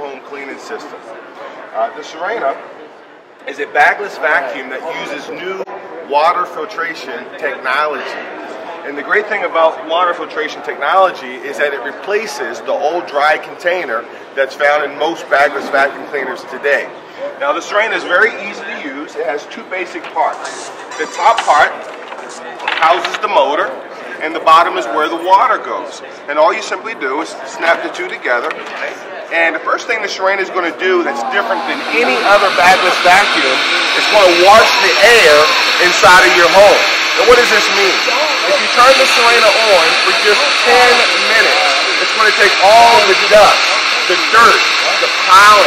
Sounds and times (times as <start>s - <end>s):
Speech: 0.0s - 2.7s, 3.4s - 45.6s.